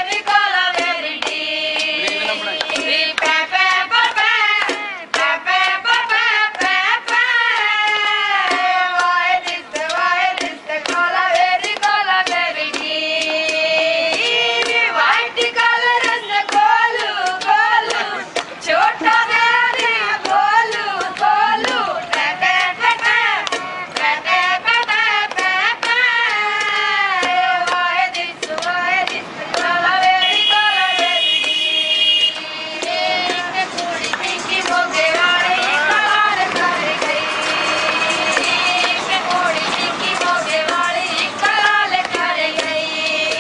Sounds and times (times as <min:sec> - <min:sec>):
Female singing: 0:00.0 - 0:31.3, 0:32.4 - 0:43.4.